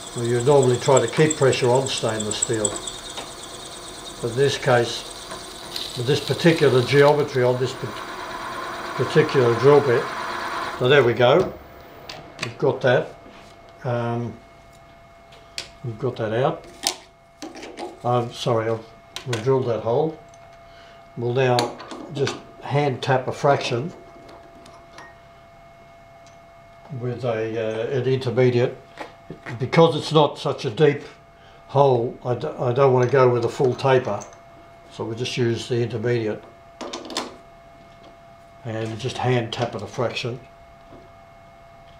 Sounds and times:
Speech: 0.2s - 2.8s, 4.2s - 5.1s, 6.0s - 8.0s, 9.0s - 10.1s, 10.8s - 11.6s, 12.4s - 13.2s, 13.8s - 14.4s, 15.8s - 16.7s, 18.0s - 20.2s, 21.2s - 24.0s, 26.9s - 34.3s, 34.9s - 36.5s, 38.6s - 40.5s.

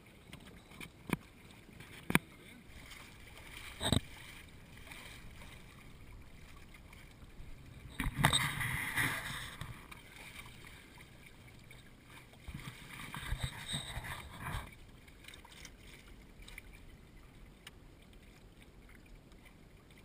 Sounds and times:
Boat, Water vehicle: 0.0s - 20.0s
Waves, surf: 0.0s - 20.0s.

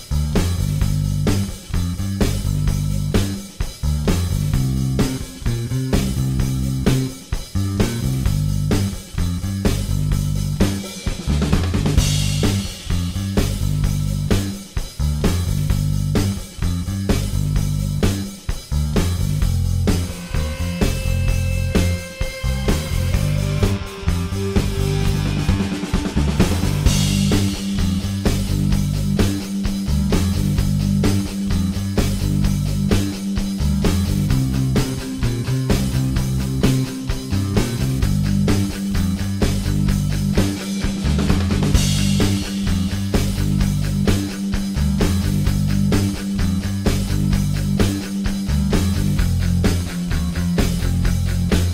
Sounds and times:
Music: 0.0s - 51.7s.

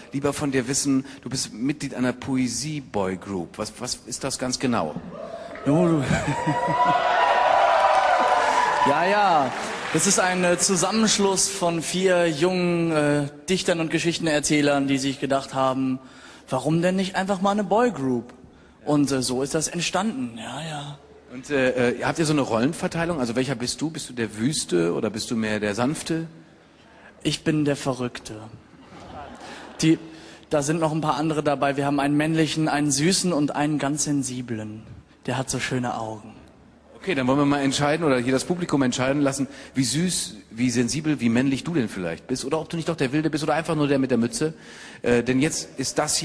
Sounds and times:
Speech: 0.0s - 5.0s, 8.9s - 18.3s, 18.9s - 26.4s, 27.2s - 28.6s, 29.8s - 36.4s, 37.0s - 46.2s.

